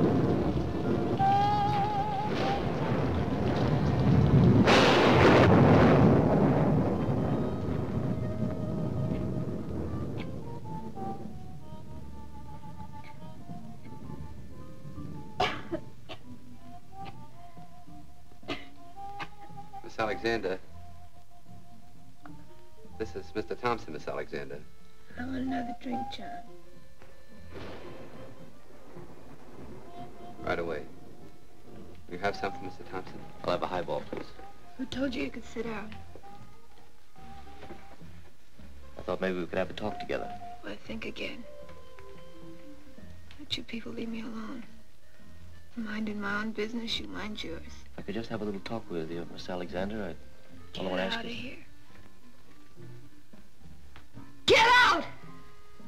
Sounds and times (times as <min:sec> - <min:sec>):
Music: 0:00.0 - 0:55.8.